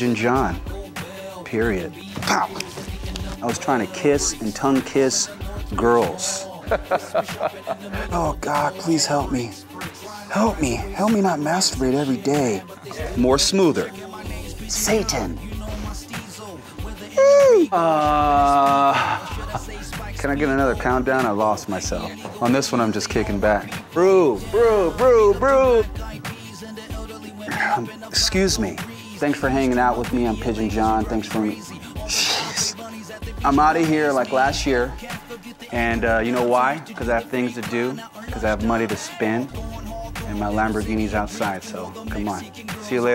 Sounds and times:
Music: 0.0 - 43.1
Speech: 14.7 - 15.4, 20.2 - 25.9, 27.5 - 31.6, 35.7 - 39.5, 40.2 - 43.1.

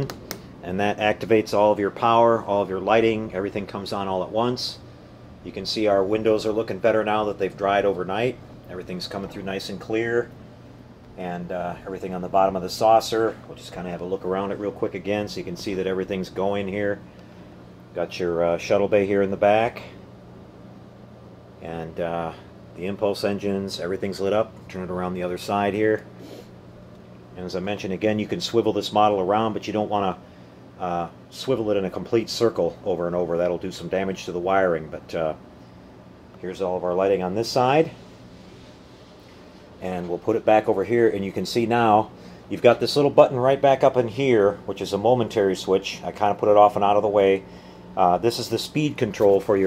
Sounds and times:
Speech: 0.0 - 4.8, 5.4 - 10.4, 11.2 - 17.0, 18.0 - 20.0, 21.6 - 26.1, 27.4 - 30.2, 30.8 - 35.4, 36.4 - 38.0, 39.8 - 47.4, 48.0 - 49.6.

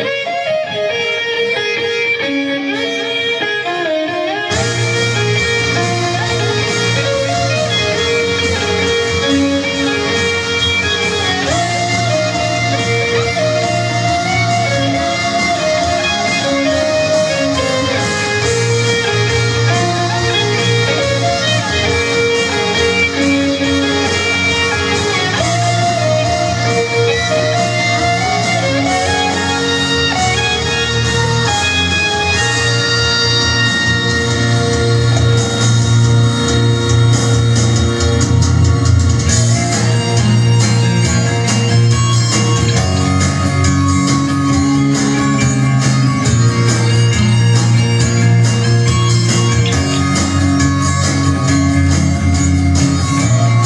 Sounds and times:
Electric guitar: 0.0 - 53.6.

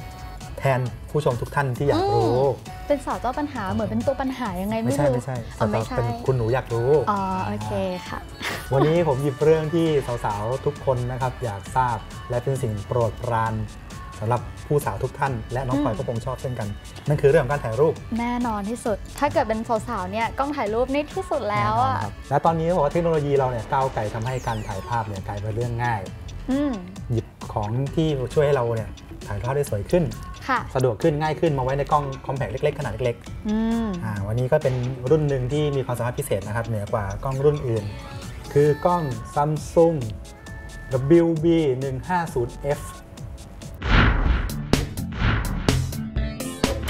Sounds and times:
Music: 0.0 - 46.9
Speech: 4.0 - 6.6, 15.7 - 16.1, 26.5 - 26.9.

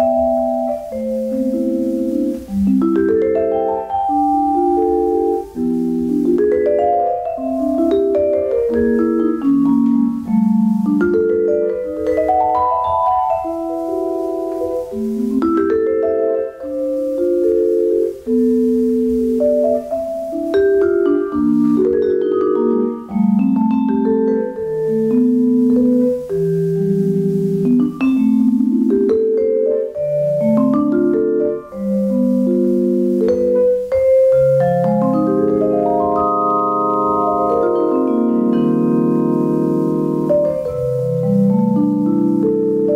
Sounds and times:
Vibraphone: 0.0 - 42.9.

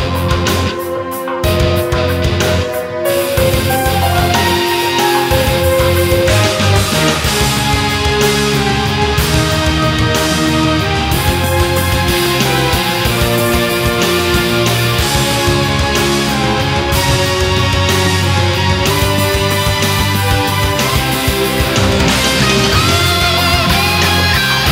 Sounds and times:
Music: 0.0 - 24.7.

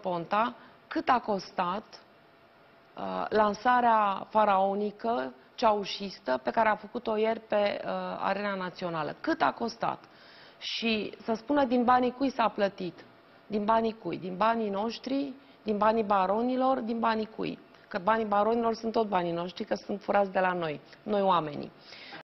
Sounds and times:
Speech: 0.0 - 2.0, 3.0 - 10.0, 10.6 - 22.2.

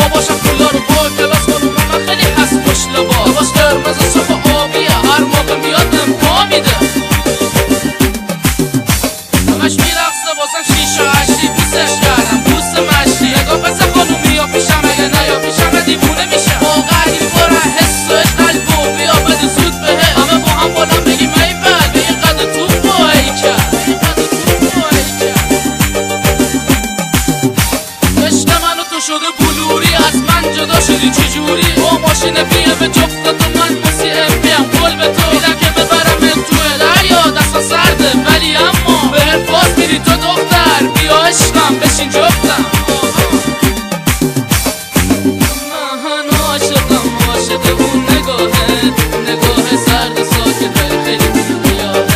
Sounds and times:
Soundtrack music: 0.0 - 52.1.

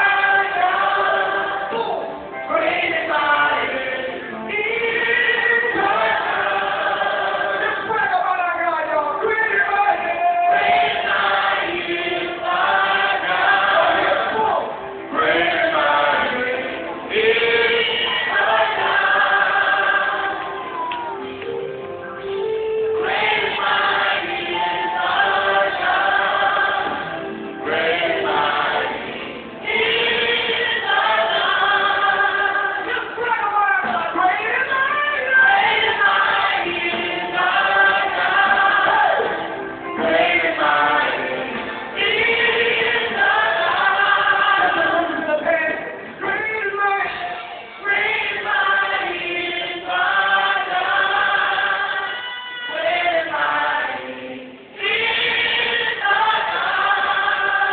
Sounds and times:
Singing: 0.0 - 21.5, 22.6 - 57.7
Music: 0.0 - 57.7.

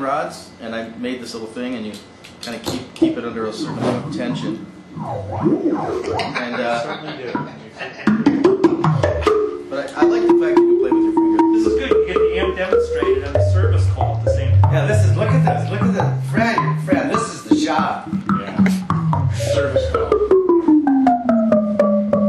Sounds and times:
Speech: 0.0 - 4.7, 9.7 - 11.0, 11.6 - 18.8, 19.4 - 20.2
Music: 3.1 - 6.4, 7.4 - 22.2.

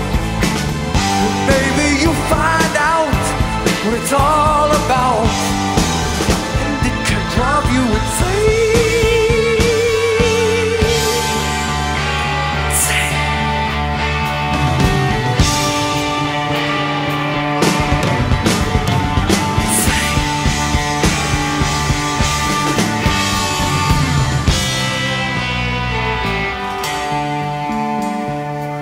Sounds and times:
Progressive rock: 0.0 - 28.8.

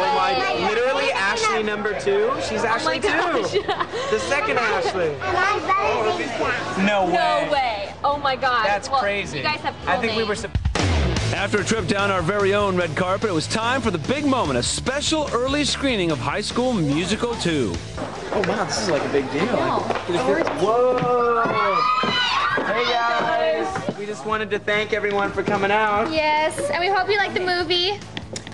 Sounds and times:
Children playing: 4.2 - 6.8, 18.3 - 24.0
Music: 8.1 - 28.5.

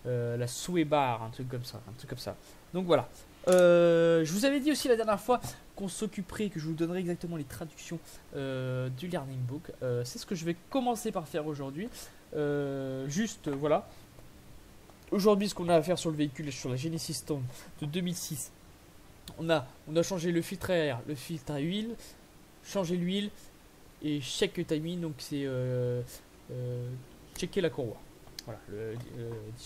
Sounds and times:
Speech: 0.0 - 13.9, 15.1 - 18.6, 19.3 - 22.0, 22.6 - 23.4, 24.0 - 29.6.

